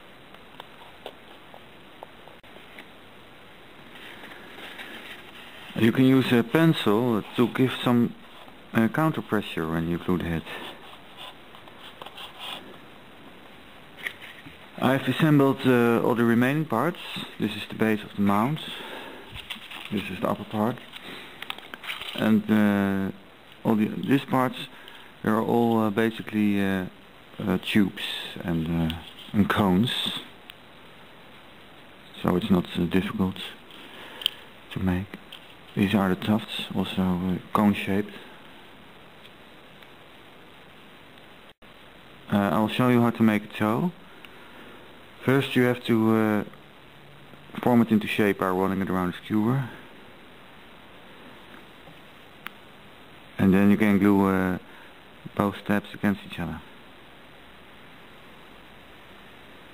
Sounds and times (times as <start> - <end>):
Speech: 5.8 - 10.8, 14.8 - 18.8, 19.9 - 20.8, 22.2 - 30.4, 32.1 - 33.6, 34.7 - 38.3, 42.3 - 44.0, 45.2 - 46.6, 47.5 - 49.9, 53.4 - 56.8.